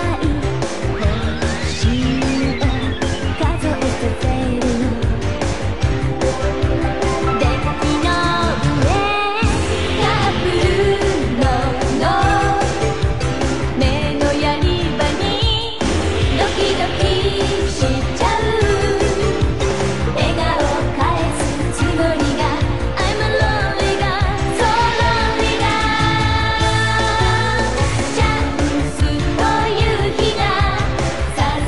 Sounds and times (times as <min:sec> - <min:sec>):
Pop music: 0:00.0 - 0:31.6.